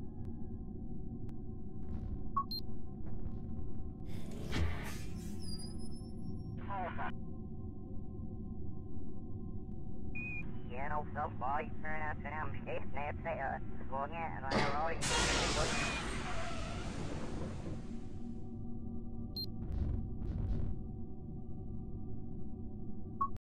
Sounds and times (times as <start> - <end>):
Beep, bleep: 2.4 - 2.6, 10.2 - 10.5, 23.2 - 23.4
Speech: 6.6 - 7.1, 10.7 - 16.4.